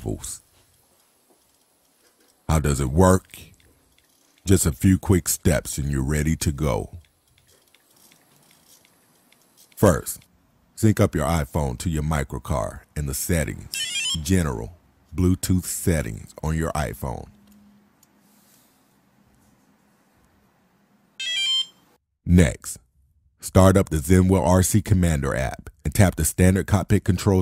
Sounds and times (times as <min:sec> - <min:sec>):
Speech: 0:00.0 - 0:00.5, 0:02.5 - 0:03.5, 0:04.5 - 0:07.0, 0:09.8 - 0:17.4, 0:22.3 - 0:22.8, 0:23.4 - 0:27.4.